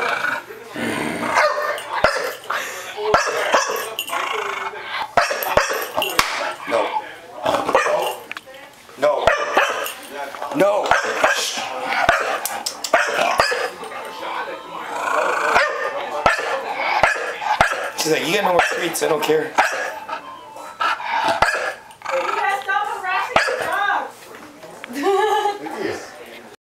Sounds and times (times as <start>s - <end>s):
Canidae, dogs, wolves: 1.3s - 8.2s, 9.2s - 14.3s, 14.9s - 18.0s, 18.6s - 22.6s, 23.3s - 23.8s
Bark: 1.4s - 2.4s, 3.1s - 3.9s, 5.2s - 5.9s, 7.7s - 8.0s, 9.3s - 9.9s, 10.9s - 11.5s, 12.1s - 13.7s, 15.6s - 18.0s, 18.6s - 18.8s, 19.6s - 20.0s, 21.4s - 21.8s, 23.4s - 23.8s.